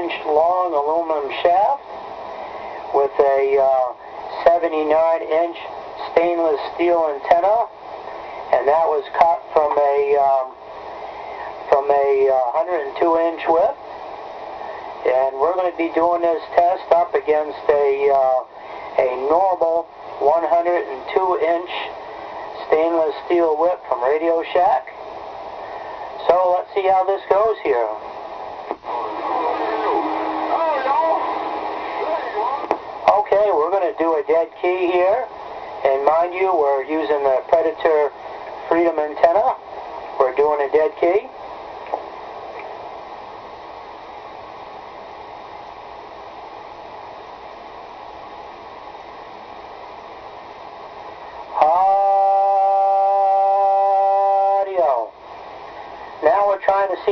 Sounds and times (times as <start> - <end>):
Radio: 0.0 - 1.8, 2.6 - 10.6, 11.2 - 13.8, 14.6 - 25.0, 25.7 - 41.3, 51.2 - 55.2, 56.0 - 57.1
Speech: 0.0 - 1.8, 2.9 - 7.8, 8.5 - 10.6, 11.7 - 13.8, 15.0 - 22.0, 22.6 - 25.0, 26.2 - 28.0, 28.9 - 31.3, 32.0 - 39.6, 40.2 - 41.4, 51.6 - 52.6, 53.3 - 55.1, 56.2 - 57.1.